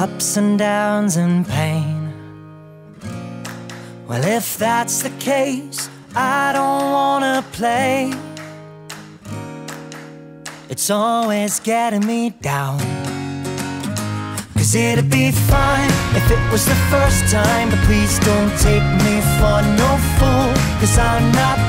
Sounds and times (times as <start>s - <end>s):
Music: 0.0s - 21.6s.